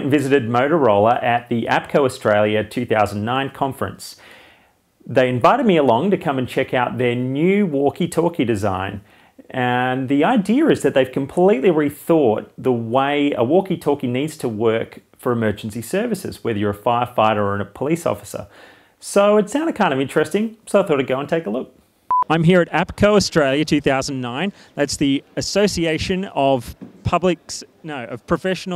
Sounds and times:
Speech: 0.0s - 4.2s, 5.0s - 28.7s.

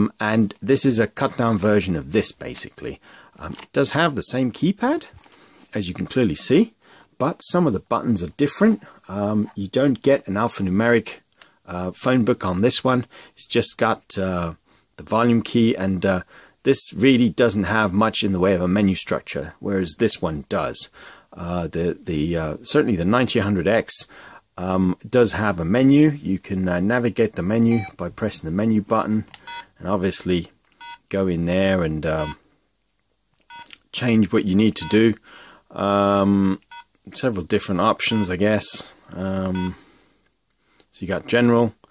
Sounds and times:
Speech: 0.0s - 32.4s, 33.8s - 39.8s, 40.9s - 41.9s
Inside, small room: 0.0s - 41.9s.

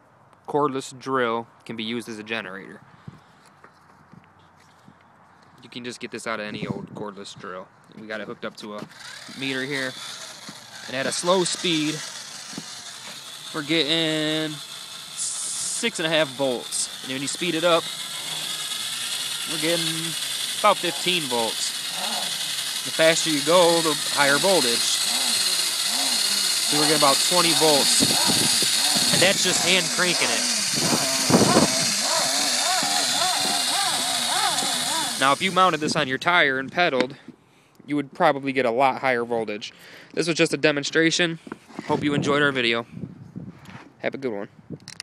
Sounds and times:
Speech: 0.5s - 2.8s, 5.6s - 10.0s, 10.9s - 12.0s, 13.6s - 14.6s, 15.2s - 17.9s, 19.5s - 21.8s, 22.9s - 25.0s, 26.7s - 28.1s, 29.1s - 30.5s, 35.2s - 37.2s, 37.9s - 42.9s, 44.0s - 44.5s
Bicycle: 8.8s - 35.8s.

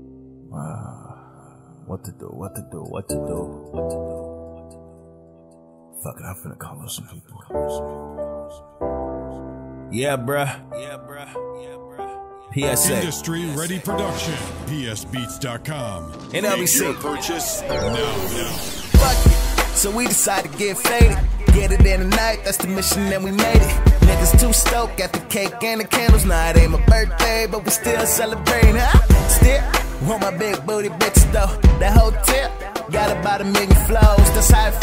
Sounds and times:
Music: 0.0s - 34.8s.

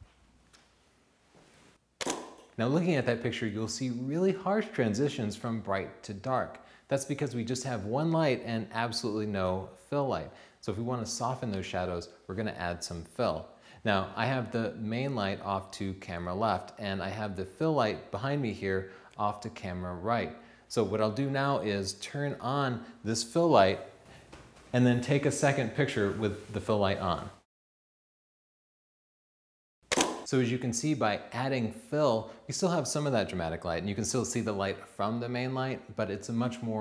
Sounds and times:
Speech: 2.6s - 23.9s, 24.7s - 27.5s, 30.3s - 36.8s.

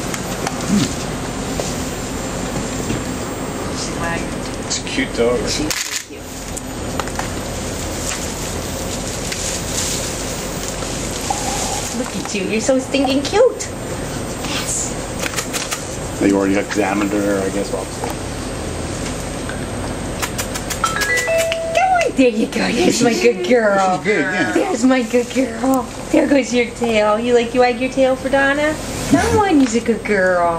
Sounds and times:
Speech: 21.9s - 30.5s.

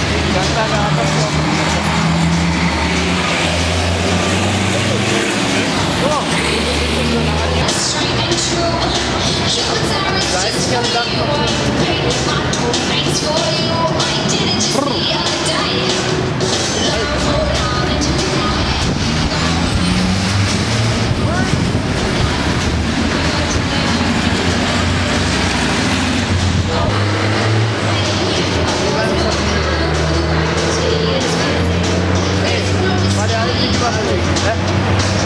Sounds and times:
Speech: 0.0s - 2.2s, 4.7s - 15.9s, 21.2s - 25.2s, 26.6s - 27.2s, 27.9s - 35.2s
Music: 7.5s - 35.2s.

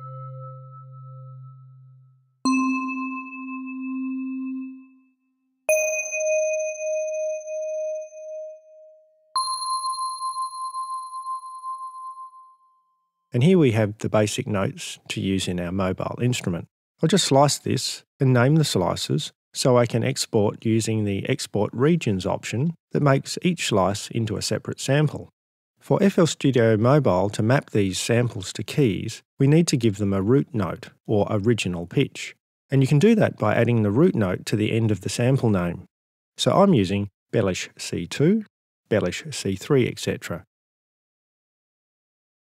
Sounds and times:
Musical instrument: 0.0s - 12.3s
Speech: 13.4s - 40.5s.

